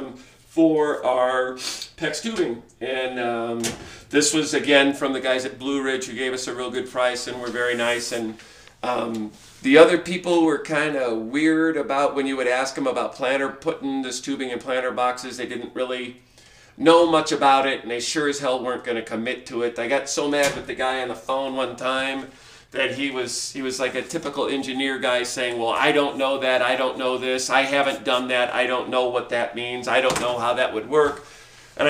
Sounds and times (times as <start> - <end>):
Speech: 0.0 - 16.2, 16.8 - 31.2.